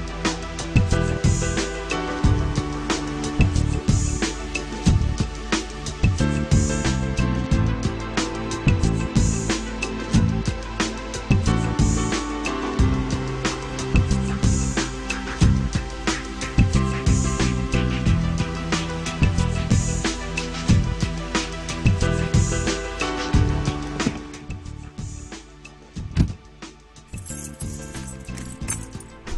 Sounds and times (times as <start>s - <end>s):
Background music: 0.0s - 29.3s.